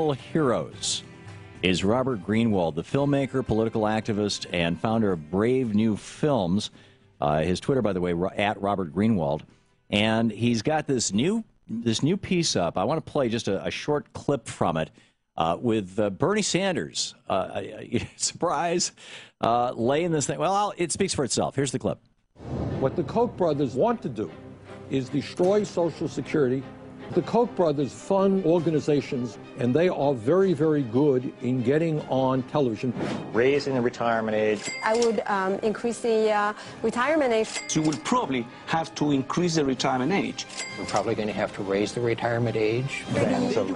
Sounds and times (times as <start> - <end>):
Music: 0.0 - 13.6, 22.4 - 43.7.